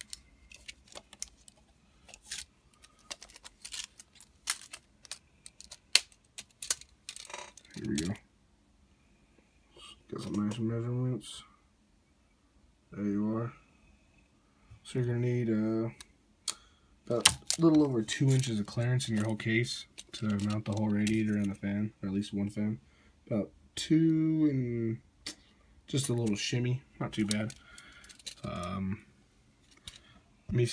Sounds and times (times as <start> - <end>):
Speech: 7.8 - 8.2, 9.8 - 11.6, 12.9 - 13.6, 14.8 - 16.0, 17.1 - 25.0, 25.9 - 27.6, 28.4 - 29.0, 30.5 - 30.7.